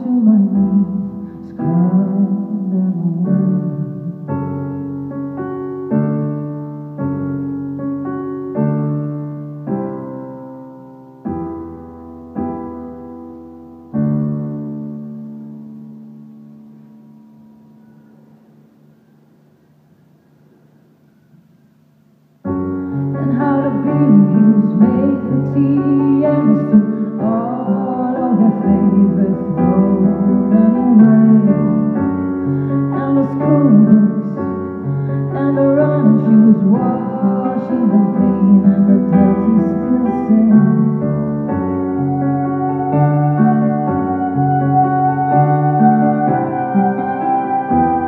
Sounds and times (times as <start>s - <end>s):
Piano: 0.0s - 48.0s.